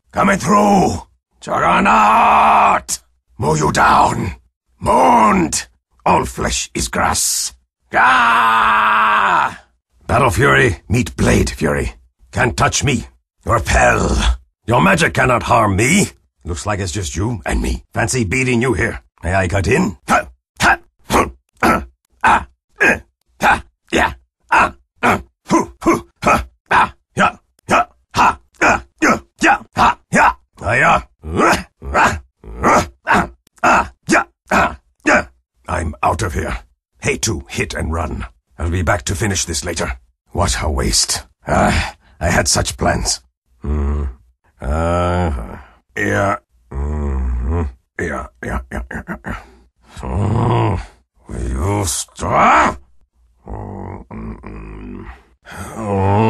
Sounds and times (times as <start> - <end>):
Speech: 0.1 - 8.2, 9.4 - 52.8, 53.4 - 56.2.